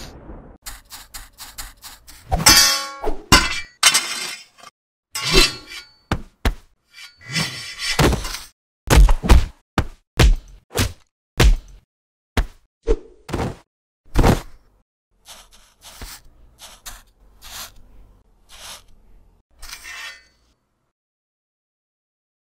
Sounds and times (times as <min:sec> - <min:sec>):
Whack, thwack: 0:08.9 - 0:11.8, 0:12.4 - 0:12.7, 0:13.3 - 0:14.6.